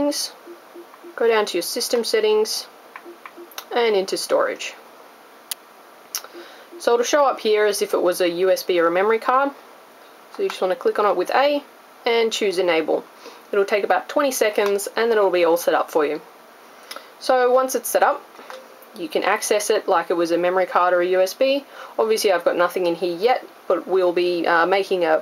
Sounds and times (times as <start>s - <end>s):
Speech: 0.0s - 0.4s, 1.2s - 2.7s, 3.6s - 4.8s, 6.2s - 9.6s, 10.4s - 16.2s, 17.2s - 18.2s, 19.0s - 25.2s.